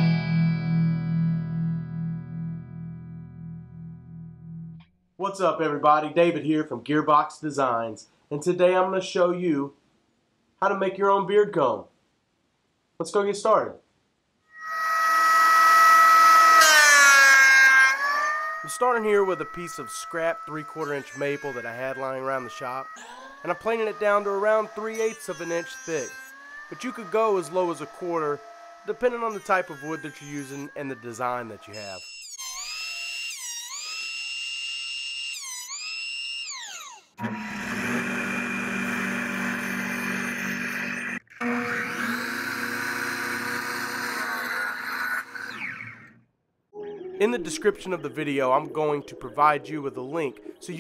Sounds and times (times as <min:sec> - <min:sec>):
Speech: 0:05.2 - 0:09.8, 0:10.6 - 0:11.9, 0:13.0 - 0:13.8, 0:18.7 - 0:32.0, 0:46.8 - 0:50.8.